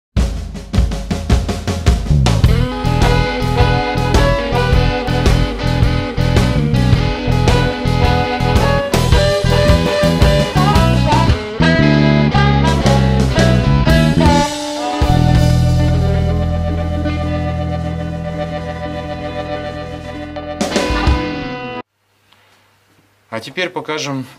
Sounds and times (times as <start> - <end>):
Bass drum: 0.2 - 18.4, 20.6 - 21.5
Drum kit: 0.2 - 21.8.